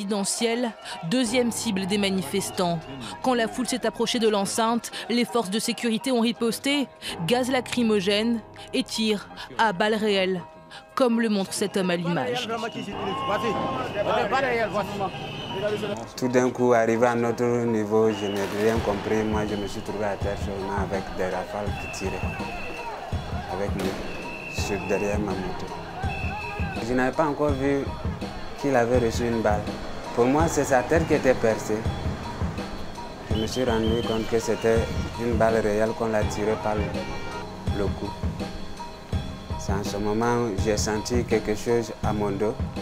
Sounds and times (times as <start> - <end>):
Music: 0.0 - 42.8.